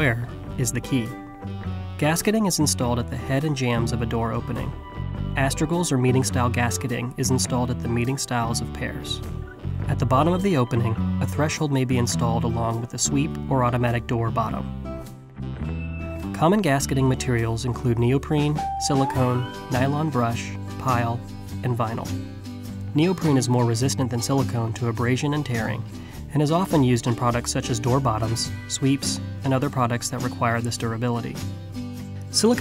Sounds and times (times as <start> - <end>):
Speech: 0.0 - 1.2, 2.0 - 4.8, 5.4 - 14.7, 16.4 - 22.2, 22.9 - 31.4, 32.3 - 32.6
Music: 0.0 - 32.6.